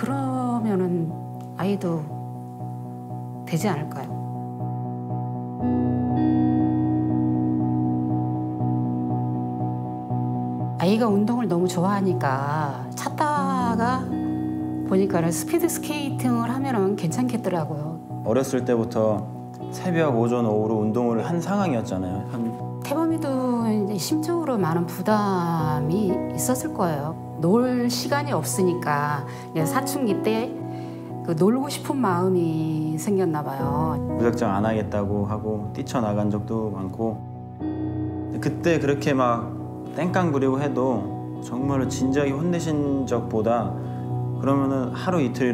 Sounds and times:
Music: 0.0 - 45.5.

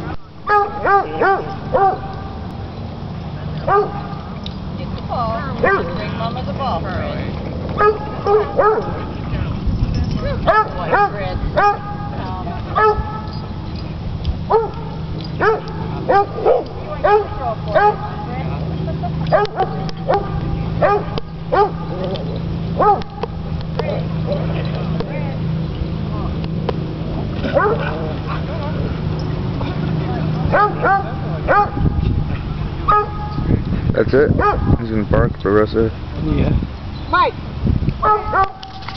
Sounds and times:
Bark: 0.5 - 2.1, 3.7 - 4.0, 5.6 - 5.9, 7.8 - 9.1, 10.4 - 11.9, 12.8 - 13.2, 14.5 - 14.8, 15.4 - 18.1, 19.3 - 21.8, 22.8 - 23.1, 27.6 - 27.9, 30.5 - 31.8, 32.9 - 33.3, 34.4 - 34.7, 38.0 - 38.6
Canidae, dogs, wolves: 0.5 - 2.3, 3.6 - 4.2, 5.6 - 6.0, 7.7 - 9.2, 10.2 - 12.0, 12.7 - 13.5, 14.5 - 18.2, 19.2 - 23.3, 27.4 - 29.3, 30.4 - 31.9, 32.8 - 33.4, 34.4 - 34.8, 38.0 - 38.9.

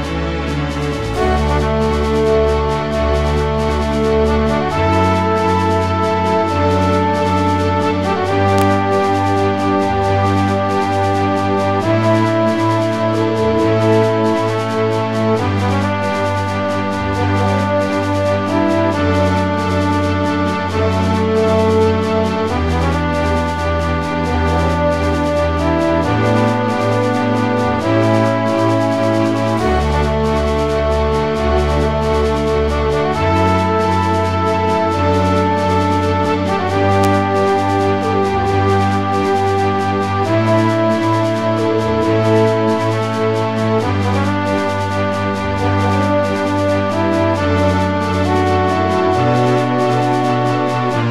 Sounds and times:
Music: 0.0 - 51.1.

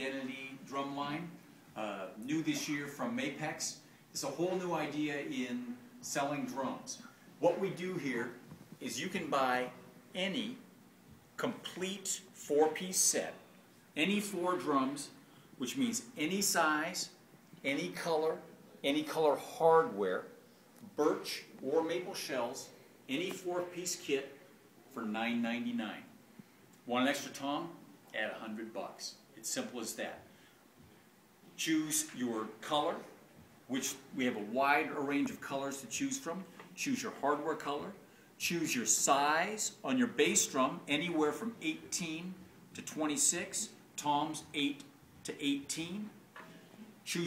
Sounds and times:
Speech: 0.0 - 10.7, 11.4 - 13.4, 14.0 - 26.2, 26.8 - 30.3, 31.6 - 46.2, 47.0 - 47.2.

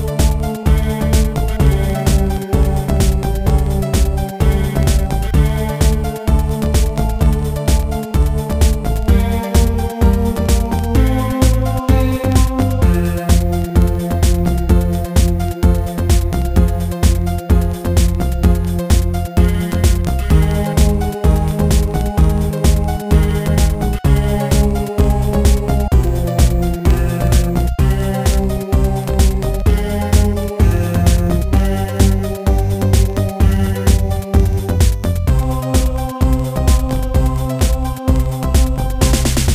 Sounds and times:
Blues: 0.0 - 39.5
Rhythm and blues: 0.0 - 39.5.

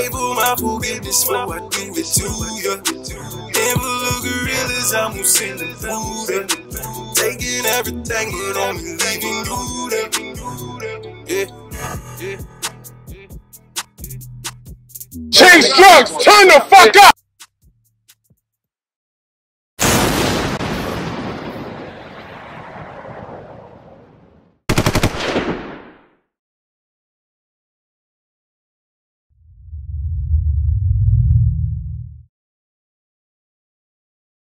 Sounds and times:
Machine gun: 24.7 - 26.0.

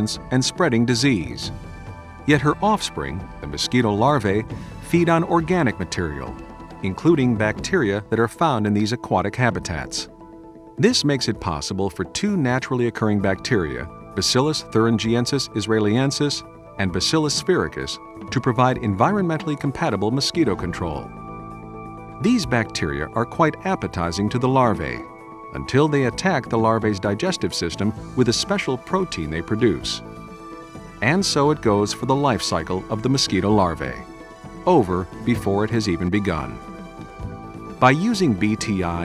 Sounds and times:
Speech: 0.0 - 1.5, 2.3 - 10.1, 10.8 - 21.1, 22.2 - 30.0, 31.0 - 34.1, 34.7 - 36.6, 37.8 - 39.0
Music: 0.0 - 39.0.

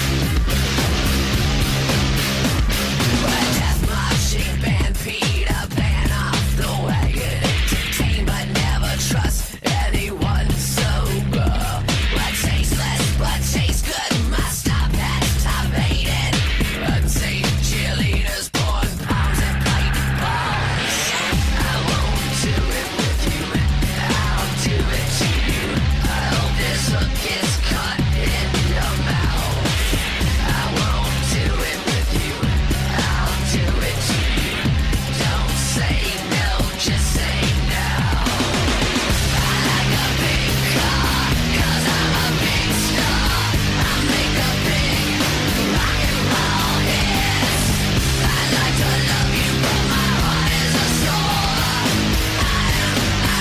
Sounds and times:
Music: 0.0 - 53.4.

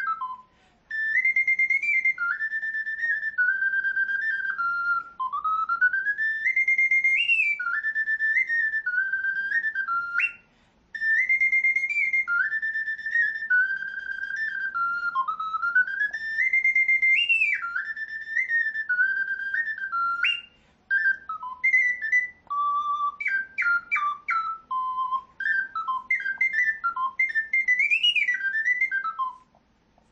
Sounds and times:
Flute: 0.0 - 30.1.

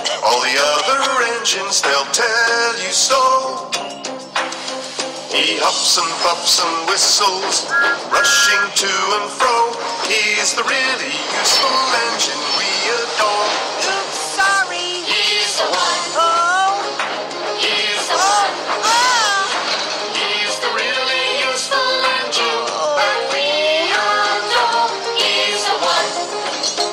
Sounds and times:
Music: 0.0 - 26.9.

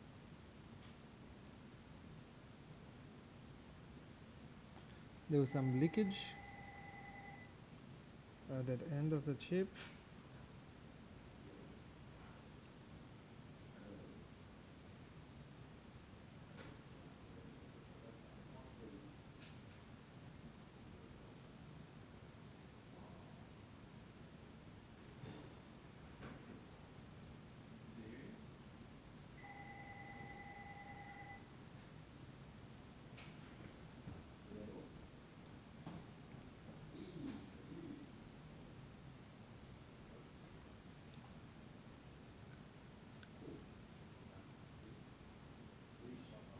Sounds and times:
Speech: 5.3 - 6.4, 8.5 - 9.8, 17.3 - 19.2, 46.0 - 46.5.

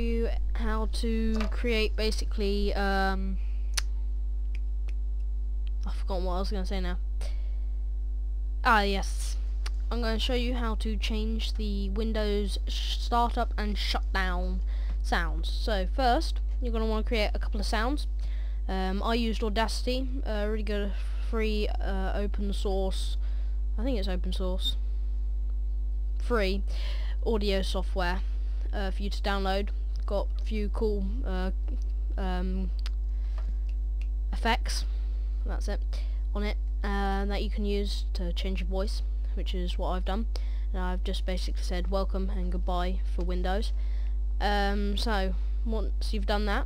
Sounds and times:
Speech: 0.0 - 3.9, 5.7 - 7.4, 8.6 - 23.2, 23.8 - 24.8, 26.2 - 32.9, 34.4 - 43.8, 44.4 - 46.6.

